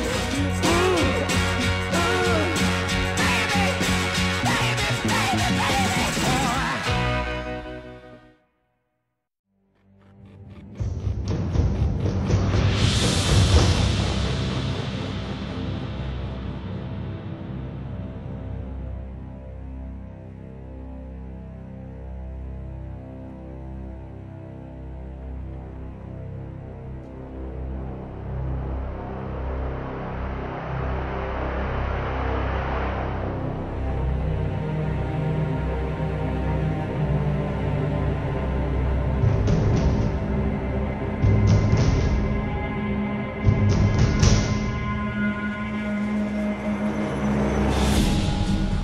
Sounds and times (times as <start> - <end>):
Scary music: 0.0 - 8.5, 9.5 - 48.8.